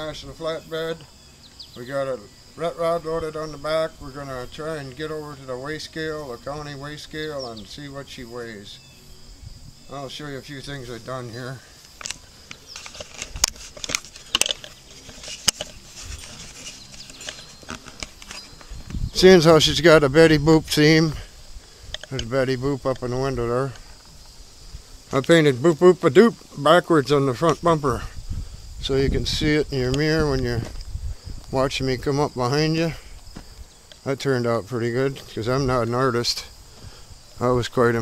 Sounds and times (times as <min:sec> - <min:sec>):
Speech: 0:00.0 - 0:01.1, 0:01.8 - 0:08.8, 0:09.9 - 0:11.6, 0:22.1 - 0:23.8, 0:28.8 - 0:30.7, 0:31.5 - 0:33.0, 0:34.0 - 0:36.5, 0:37.4 - 0:38.0.